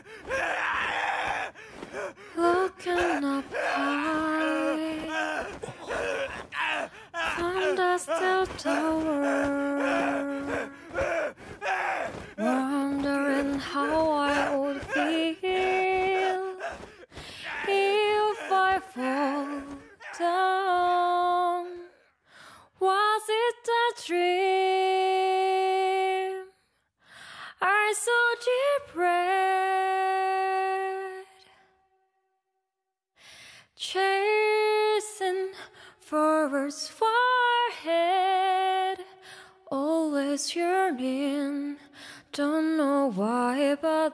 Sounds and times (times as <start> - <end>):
Female singing: 2.3 - 5.8, 6.8 - 11.1, 12.4 - 26.7, 27.4 - 31.7, 33.8 - 44.1.